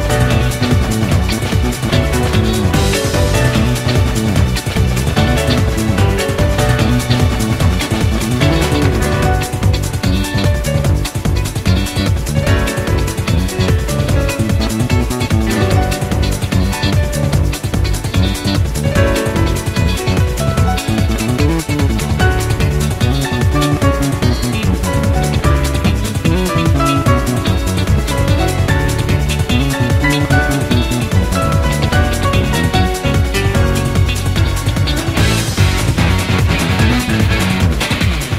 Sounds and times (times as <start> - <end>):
Music: 0.0 - 38.3.